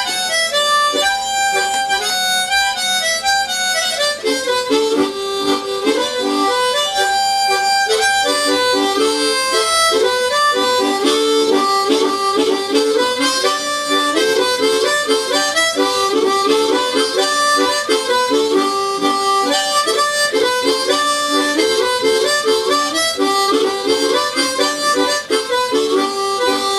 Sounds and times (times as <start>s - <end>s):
Harmonica: 0.0s - 26.7s.